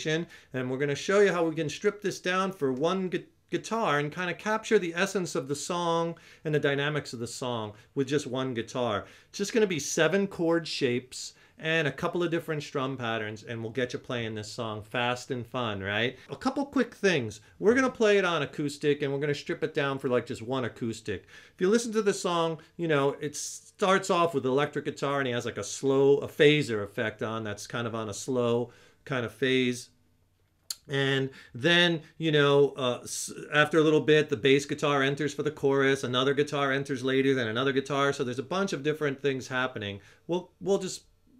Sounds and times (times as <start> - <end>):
Speech: 0.0 - 30.0, 30.7 - 41.3.